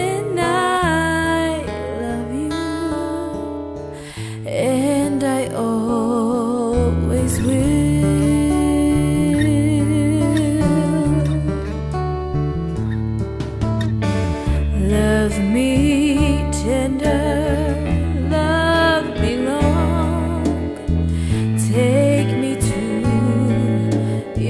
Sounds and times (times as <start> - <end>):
Christmas music: 11.2 - 15.7.